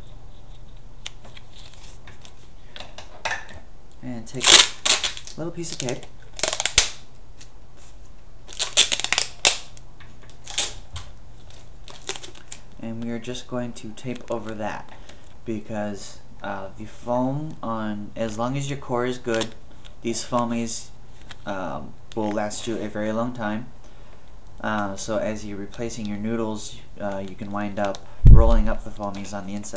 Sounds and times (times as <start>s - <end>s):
Inside, small room: 0.0s - 29.7s
Speech: 4.0s - 4.5s, 5.4s - 6.1s, 12.8s - 14.9s, 15.5s - 20.9s, 21.5s - 23.7s, 24.6s - 29.7s.